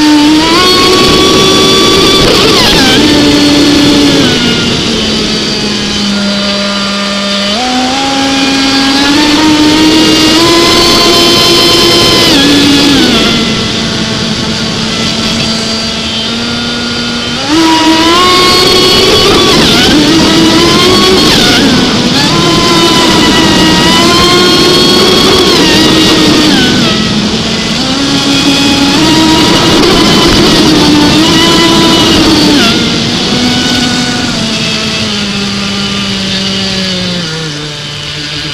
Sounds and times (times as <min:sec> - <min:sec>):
Motorboat, speedboat: 0:00.0 - 0:38.5.